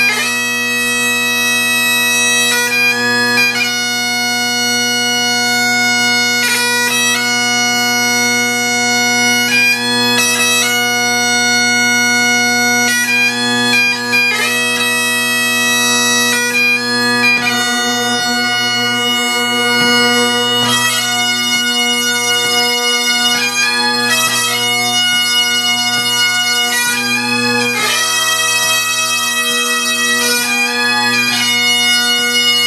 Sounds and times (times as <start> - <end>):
Bagpipes: 0.0 - 32.6.